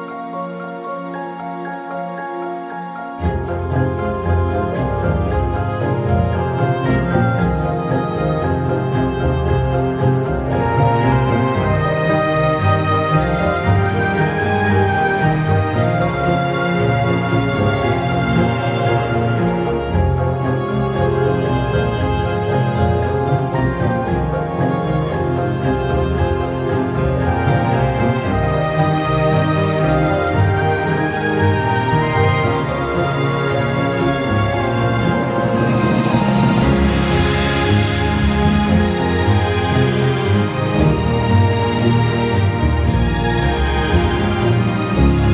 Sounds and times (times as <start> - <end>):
Background music: 0.0 - 45.3.